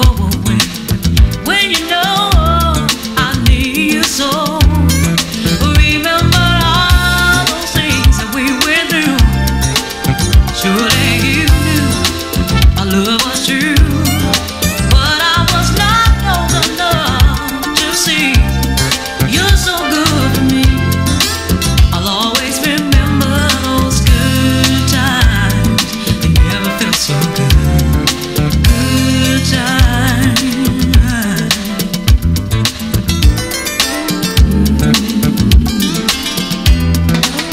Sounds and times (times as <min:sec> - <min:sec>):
Music: 0:00.0 - 0:37.5.